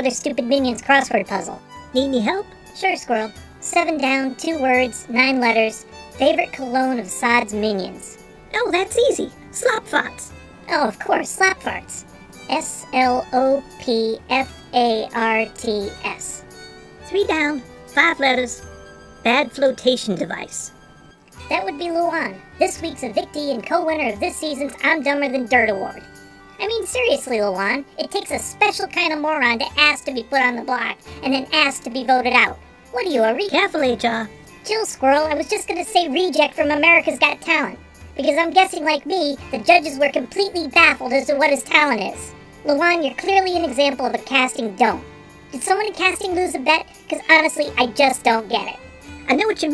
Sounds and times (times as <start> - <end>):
Speech: 0.0 - 16.4, 17.1 - 18.6, 19.2 - 20.7, 21.5 - 26.0, 26.6 - 45.0, 45.6 - 49.7
Music: 0.0 - 49.7.